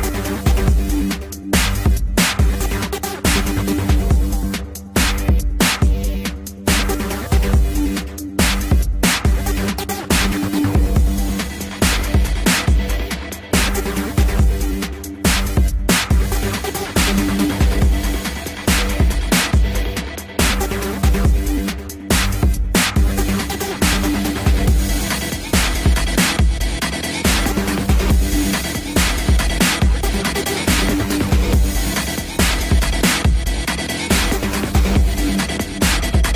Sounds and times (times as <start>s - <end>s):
Dubstep: 0.0s - 36.3s.